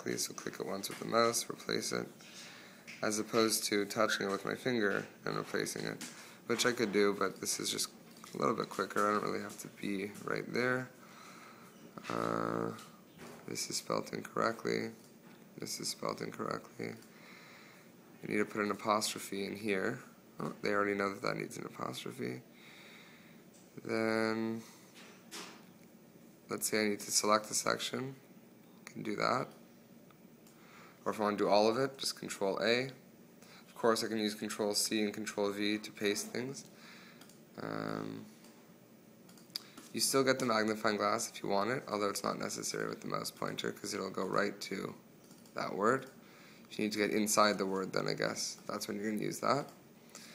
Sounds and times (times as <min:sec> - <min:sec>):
Speech: 0:00.0 - 0:02.2, 0:03.0 - 0:11.0, 0:12.0 - 0:15.0, 0:15.6 - 0:17.0, 0:18.2 - 0:22.4, 0:23.8 - 0:24.7, 0:26.5 - 0:28.2, 0:28.9 - 0:29.6, 0:31.0 - 0:33.0, 0:33.8 - 0:36.7, 0:37.6 - 0:38.4, 0:39.9 - 0:45.0, 0:45.6 - 0:49.8.